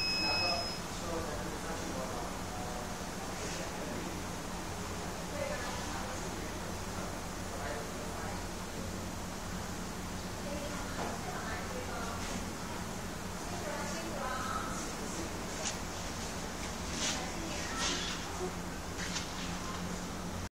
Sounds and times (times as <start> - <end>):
Speech: 0.2 - 4.4, 5.2 - 9.0, 10.4 - 15.9, 17.0 - 18.6.